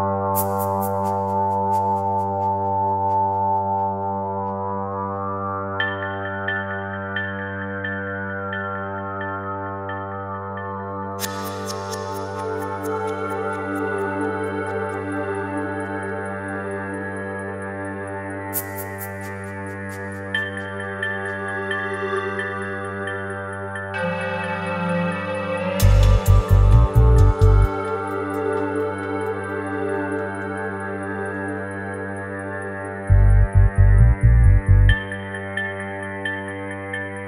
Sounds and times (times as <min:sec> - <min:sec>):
Music: 0:00.0 - 0:37.2.